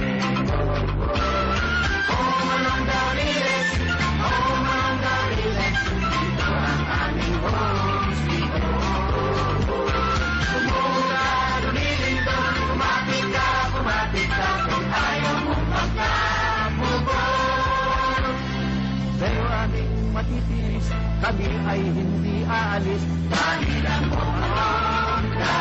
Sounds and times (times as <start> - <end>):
Music: 0.0 - 25.6
Male singing: 2.2 - 9.6, 10.5 - 18.4, 19.2 - 25.6.